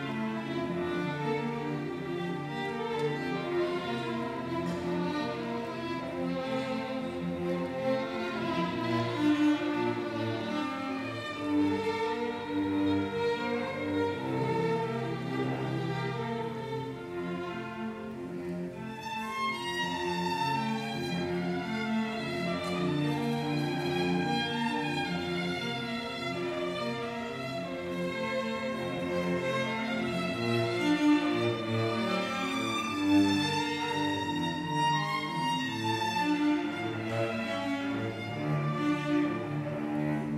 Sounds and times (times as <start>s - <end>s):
Cello: 0.0s - 40.3s
Violin, fiddle: 0.0s - 40.3s.